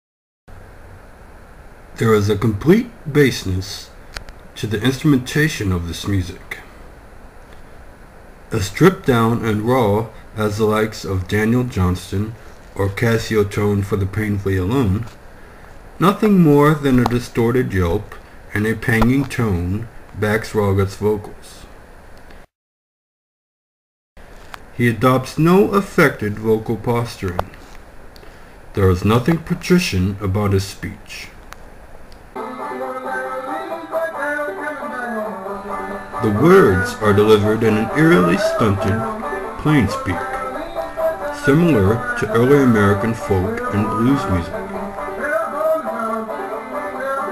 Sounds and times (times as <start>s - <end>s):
Speech: 2.0s - 4.0s, 4.6s - 6.7s, 8.5s - 15.2s, 16.0s - 21.7s, 24.8s - 27.6s, 28.8s - 31.4s, 36.2s - 40.3s, 41.4s - 44.6s
Folk music: 32.4s - 47.3s.